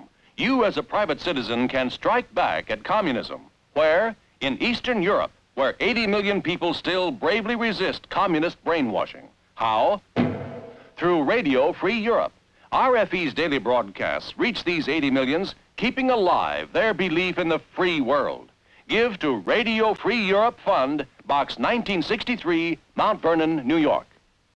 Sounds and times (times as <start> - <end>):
Speech: 0.0 - 10.1, 11.0 - 24.2.